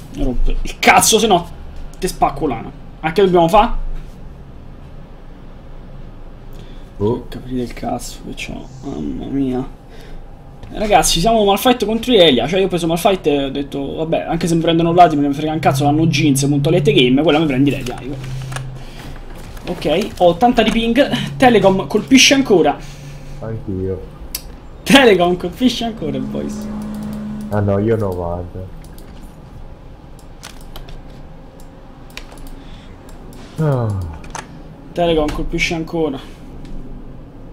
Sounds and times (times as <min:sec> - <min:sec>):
Speech: 0:00.2 - 0:03.8, 0:07.0 - 0:09.7, 0:10.7 - 0:18.2, 0:19.7 - 0:22.8, 0:24.9 - 0:26.7, 0:27.6 - 0:28.7, 0:35.0 - 0:36.3.